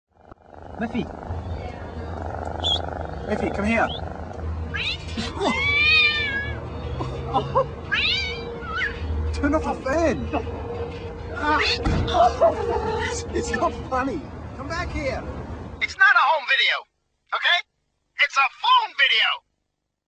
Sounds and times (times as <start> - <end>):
Speech: 15.8 - 19.4.